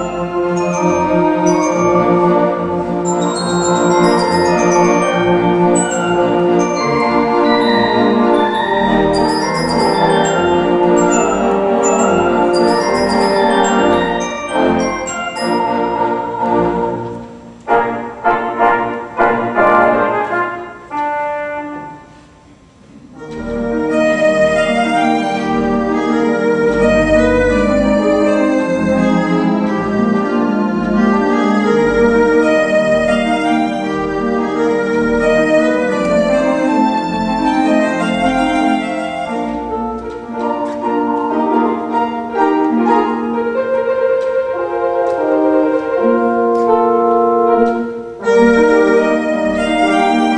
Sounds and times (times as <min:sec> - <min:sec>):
Hammond organ: 0:00.0 - 0:17.2, 0:23.2 - 0:50.3.